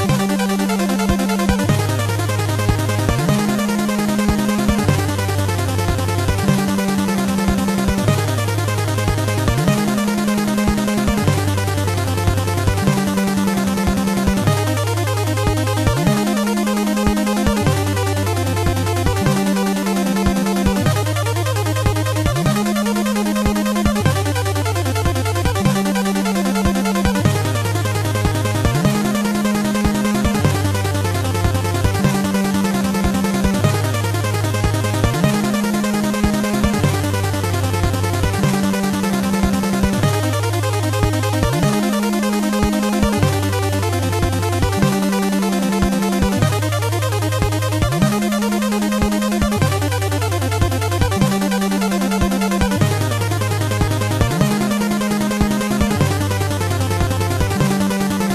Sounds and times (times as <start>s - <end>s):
Video game music: 0.0s - 58.3s.